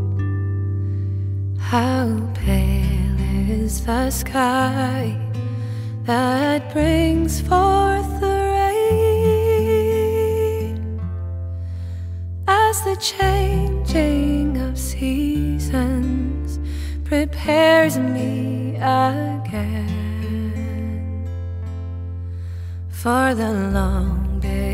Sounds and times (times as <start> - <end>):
Music: 0.0 - 24.7.